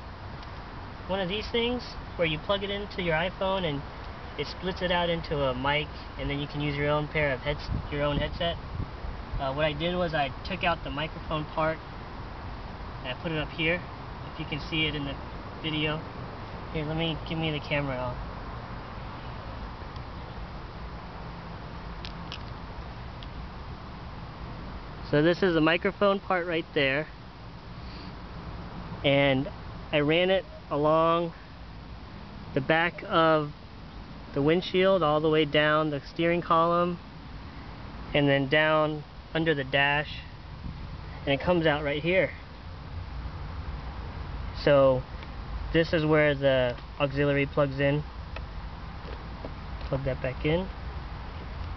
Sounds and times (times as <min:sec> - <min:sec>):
Speech: 0:01.1 - 0:08.6, 0:09.4 - 0:11.8, 0:13.0 - 0:16.0, 0:16.8 - 0:18.2, 0:25.1 - 0:27.1, 0:29.0 - 0:31.4, 0:32.6 - 0:33.6, 0:34.3 - 0:37.0, 0:38.1 - 0:40.3, 0:41.2 - 0:42.4, 0:44.6 - 0:45.1, 0:45.8 - 0:48.1, 0:49.9 - 0:50.7.